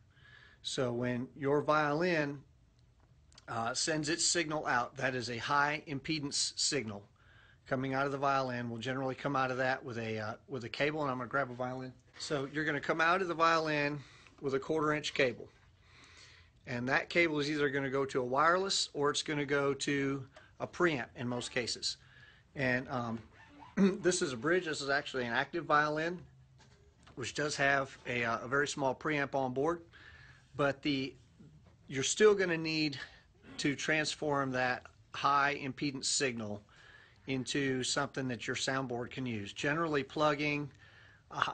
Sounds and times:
Speech: 0.6s - 2.5s, 3.4s - 7.1s, 7.7s - 15.5s, 16.6s - 22.0s, 22.6s - 26.3s, 27.1s - 29.9s, 30.6s - 31.2s, 31.9s - 41.5s.

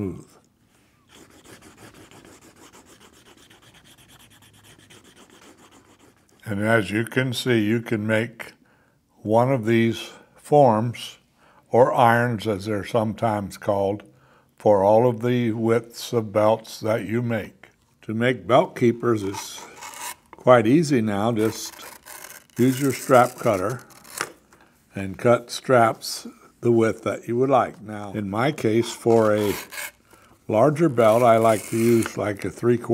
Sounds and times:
Speech: 0.0s - 0.4s, 6.4s - 8.6s, 9.2s - 19.7s, 20.4s - 21.9s, 22.6s - 23.9s, 24.9s - 29.7s, 30.5s - 32.9s.

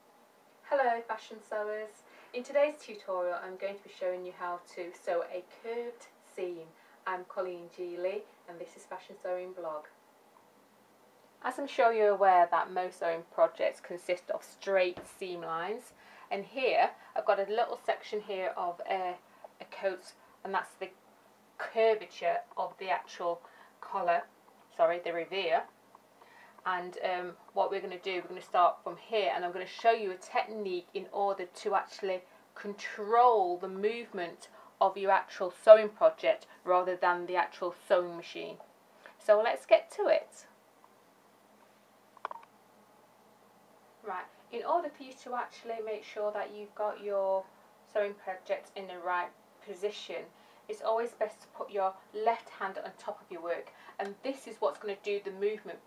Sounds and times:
Speech: 0.7s - 10.0s, 11.4s - 21.0s, 21.6s - 25.7s, 26.6s - 38.6s, 39.2s - 40.5s, 44.0s - 55.8s.

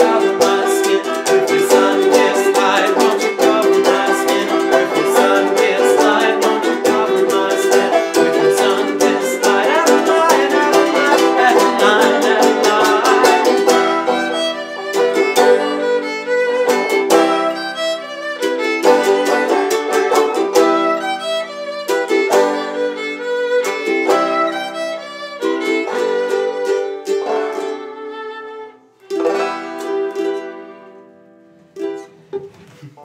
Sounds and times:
Bowed string instrument: 0.0s - 33.0s
Guitar: 0.0s - 33.0s.

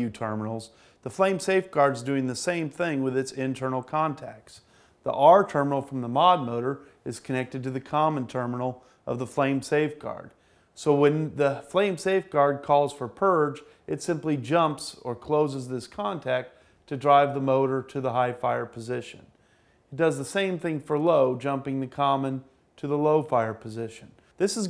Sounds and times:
Speech: 0.0s - 19.3s, 19.9s - 24.7s.

